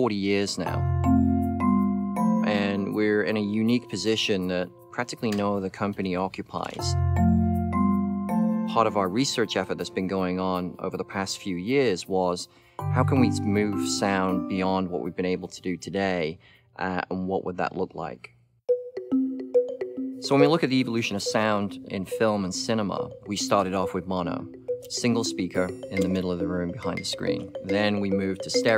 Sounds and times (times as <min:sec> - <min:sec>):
Speech: 0:00.0 - 0:00.9, 0:02.4 - 0:07.0, 0:08.7 - 0:18.4, 0:20.2 - 0:28.7
Music: 0:00.0 - 0:15.7, 0:18.7 - 0:28.7.